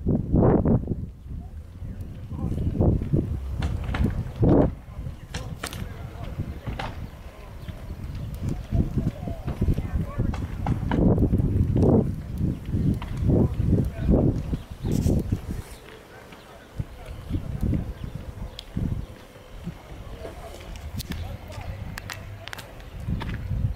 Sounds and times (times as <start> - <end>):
Crackle: 0.9 - 23.7
Speech: 1.3 - 2.9, 4.6 - 10.7, 13.2 - 19.0, 19.7 - 23.1.